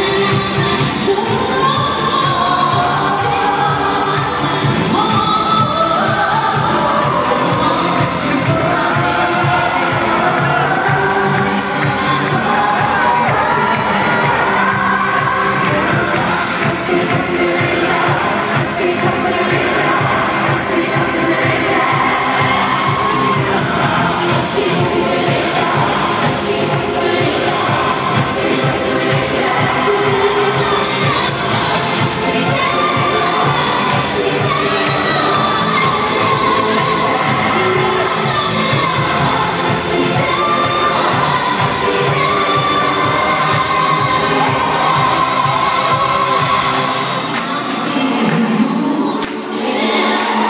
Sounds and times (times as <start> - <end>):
Crowd: 0.0 - 50.5.